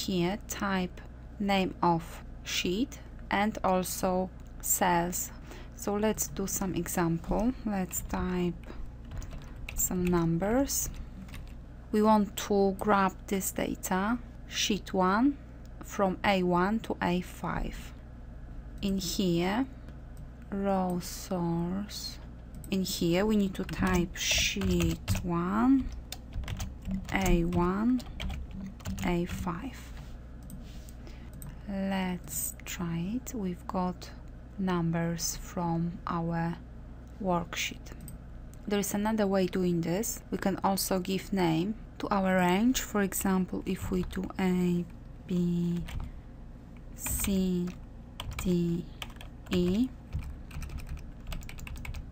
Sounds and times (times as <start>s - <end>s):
Speech: 0.0s - 8.8s, 9.8s - 11.0s, 12.0s - 18.0s, 18.8s - 19.7s, 20.5s - 25.9s, 27.1s - 28.1s, 29.0s - 29.9s, 31.6s - 36.6s, 37.2s - 38.0s, 38.7s - 45.9s, 47.0s - 47.8s, 48.4s - 48.9s, 49.5s - 50.0s.